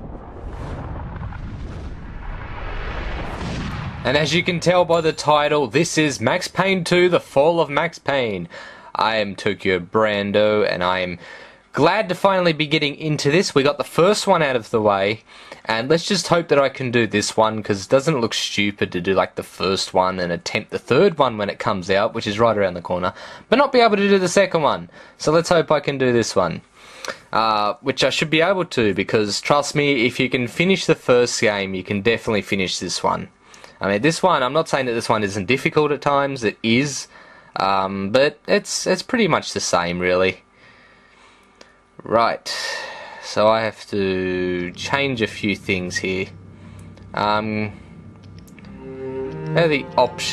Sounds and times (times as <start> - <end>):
Speech: 4.0 - 11.2, 11.8 - 40.4, 42.0 - 46.3, 47.2 - 47.8, 49.6 - 50.3.